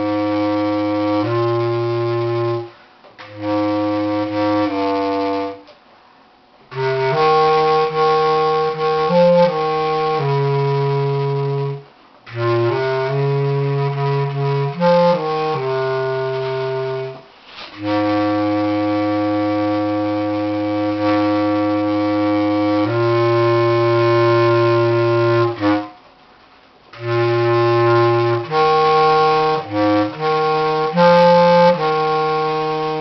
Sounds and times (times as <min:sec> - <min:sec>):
Clarinet: 0:00.0 - 0:33.0.